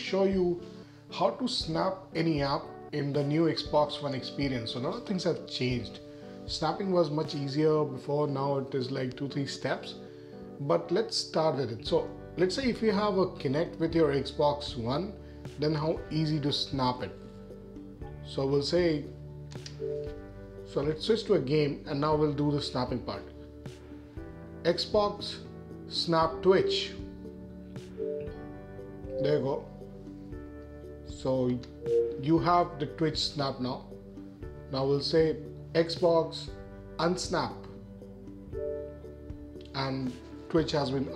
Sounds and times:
Speech: 0:00.0 - 0:10.0, 0:10.6 - 0:17.2, 0:18.3 - 0:19.1, 0:20.7 - 0:23.3, 0:24.6 - 0:27.1, 0:29.1 - 0:29.7, 0:31.1 - 0:33.9, 0:34.7 - 0:37.8, 0:39.7 - 0:41.1
Music: 0:00.0 - 0:41.1.

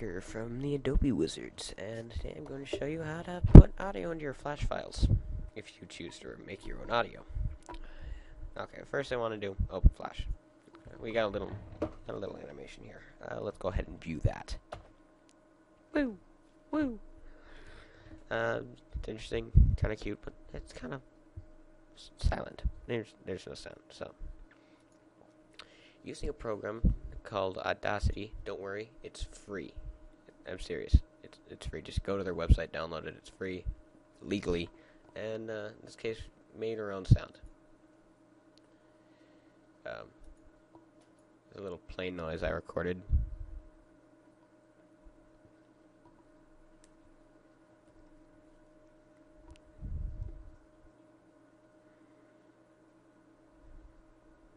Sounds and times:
Speech: 0:00.0 - 0:07.3, 0:08.6 - 0:14.6, 0:16.0 - 0:16.2, 0:16.8 - 0:17.0, 0:18.3 - 0:21.0, 0:22.0 - 0:24.2, 0:26.0 - 0:37.5, 0:39.9 - 0:40.1, 0:41.6 - 0:43.2.

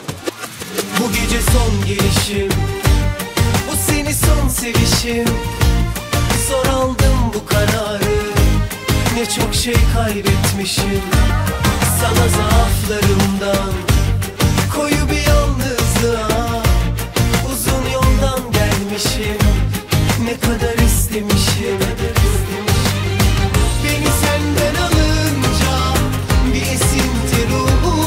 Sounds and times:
Theme music: 0:00.0 - 0:28.0.

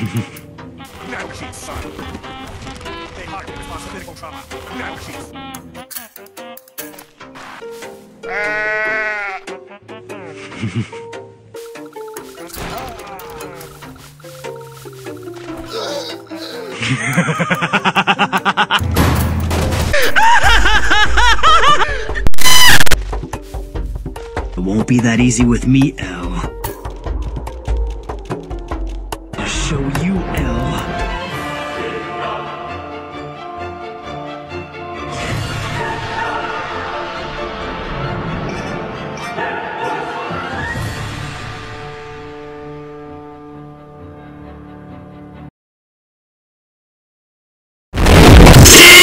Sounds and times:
Music: 0:00.0 - 0:45.5, 0:48.0 - 0:49.0
Speech: 0:24.6 - 0:26.5, 0:29.4 - 0:31.0.

